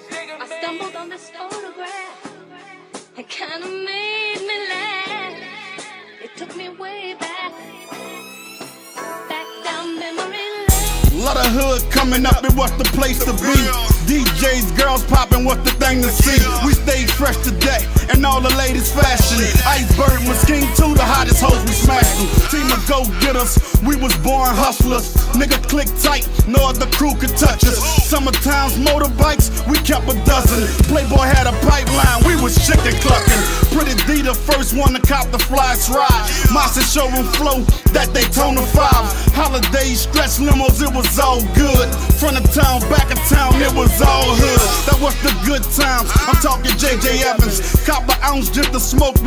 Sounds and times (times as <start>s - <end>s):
Soundtrack music: 10.7s - 26.2s, 27.0s - 37.5s, 38.1s - 48.7s.